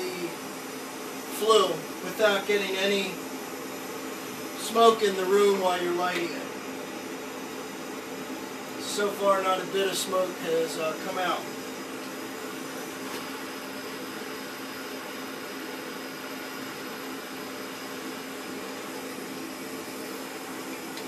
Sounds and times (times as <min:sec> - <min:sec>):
Speech: 0:00.0 - 0:00.4, 0:01.3 - 0:03.2, 0:04.6 - 0:06.5, 0:08.8 - 0:11.5.